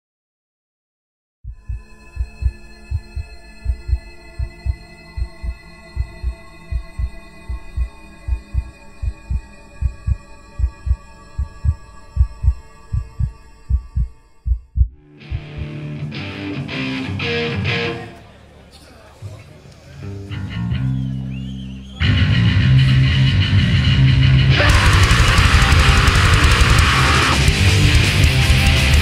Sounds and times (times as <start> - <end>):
Drum: 1.5 - 15.7, 24.6 - 29.0
Speech: 17.8 - 20.1.